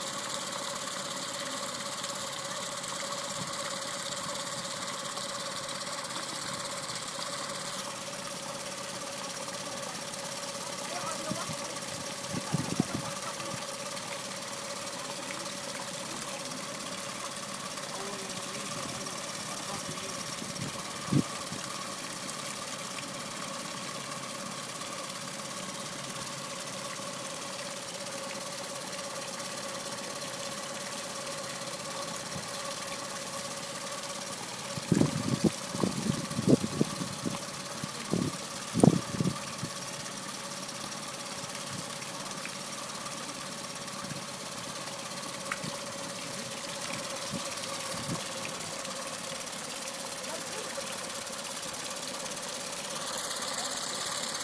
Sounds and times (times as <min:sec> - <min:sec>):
Engine: 0:00.0 - 0:54.4.